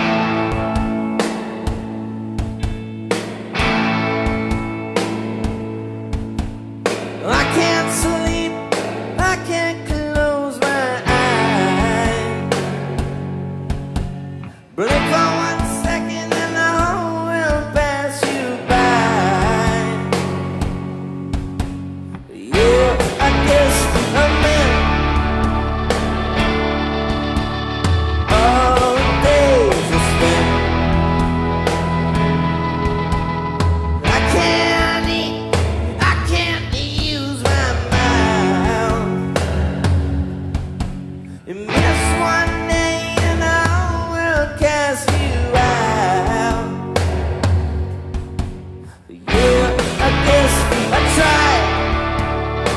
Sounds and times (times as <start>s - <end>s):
Music: 0.0s - 52.7s
Singing: 14.8s - 20.1s, 22.3s - 25.0s, 28.3s - 30.8s, 34.1s - 39.7s, 41.5s - 46.9s, 49.0s - 52.1s.